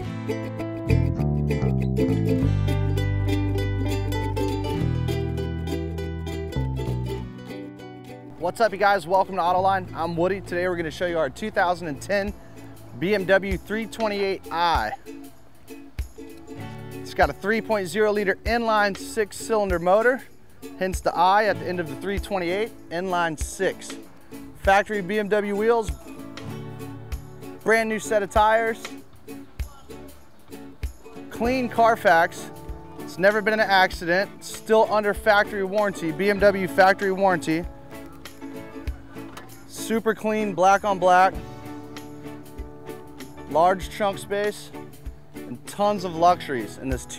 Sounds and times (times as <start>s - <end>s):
Music: 0.0s - 47.1s
Speech: 8.4s - 12.4s, 13.0s - 15.0s, 17.1s - 24.0s, 24.6s - 26.0s, 27.6s - 28.9s, 31.4s - 32.5s, 33.1s - 37.7s, 39.3s - 41.4s, 43.5s - 44.7s, 45.5s - 47.1s.